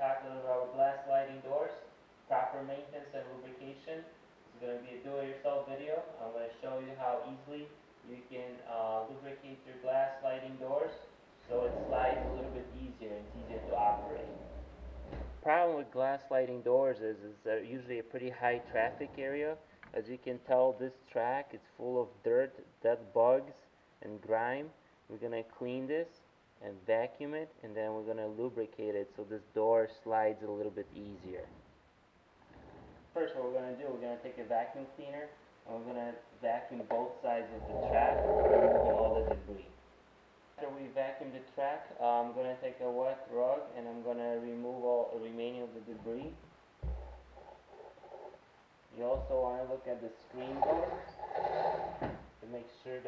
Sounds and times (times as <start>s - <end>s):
Speech: 0.0s - 14.4s, 15.4s - 31.6s, 33.2s - 39.8s, 40.6s - 46.4s, 48.9s - 51.2s, 52.4s - 53.0s.